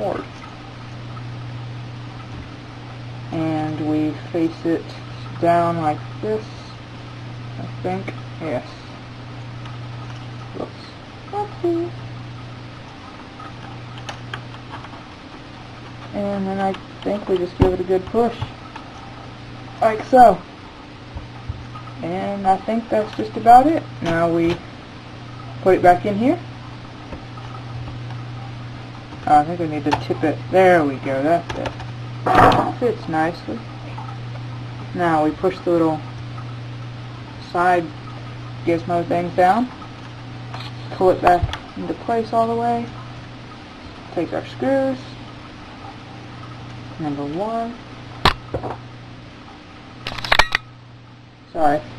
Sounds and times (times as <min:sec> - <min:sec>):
Speech: 0:00.0 - 0:00.3, 0:03.3 - 0:06.8, 0:07.6 - 0:08.9, 0:10.6 - 0:12.0, 0:16.1 - 0:18.5, 0:19.8 - 0:20.4, 0:22.0 - 0:24.6, 0:25.6 - 0:26.4, 0:29.2 - 0:31.7, 0:32.5 - 0:33.6, 0:34.9 - 0:36.0, 0:37.4 - 0:38.0, 0:38.6 - 0:39.7, 0:40.9 - 0:42.9, 0:44.1 - 0:45.2, 0:47.0 - 0:47.8, 0:51.5 - 0:51.9.